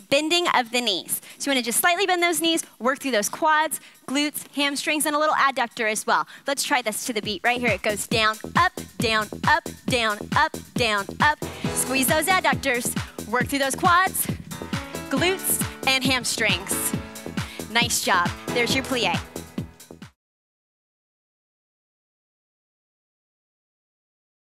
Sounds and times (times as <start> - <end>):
Speech: 0.0 - 14.4, 15.1 - 17.0, 17.6 - 19.2
Music: 0.0 - 20.2.